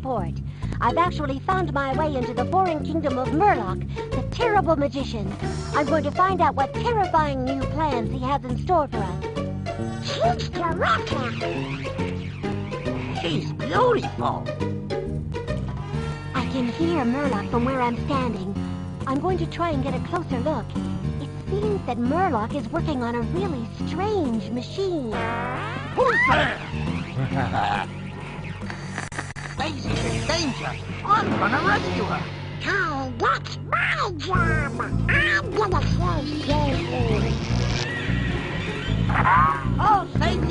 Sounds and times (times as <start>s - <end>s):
Music: 0.0s - 40.5s.